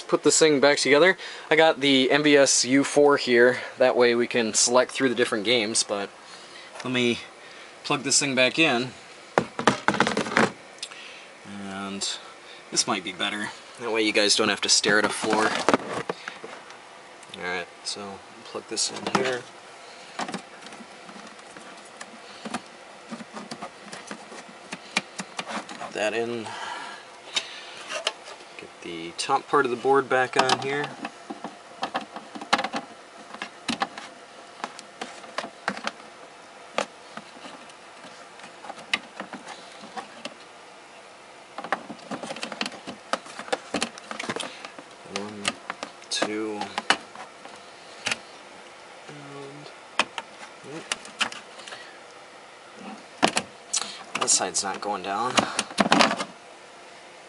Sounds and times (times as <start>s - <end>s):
Speech: 0.0s - 6.1s, 6.8s - 9.0s, 11.4s - 15.6s, 17.3s - 19.5s, 25.9s - 26.5s, 28.6s - 31.0s, 45.1s - 46.8s, 49.1s - 49.7s, 54.2s - 55.5s.